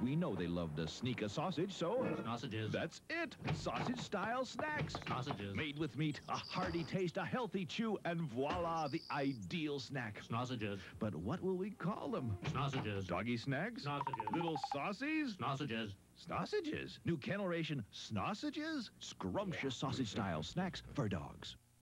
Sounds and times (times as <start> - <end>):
Speech: 0.0 - 21.6.